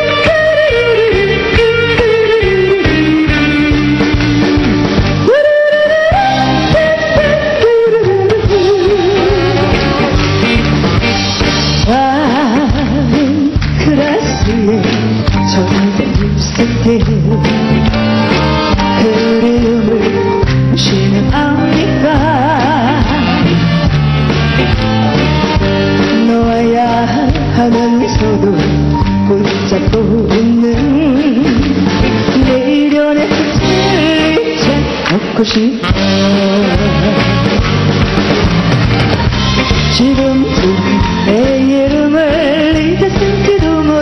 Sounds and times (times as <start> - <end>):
Music: 0.0 - 44.0.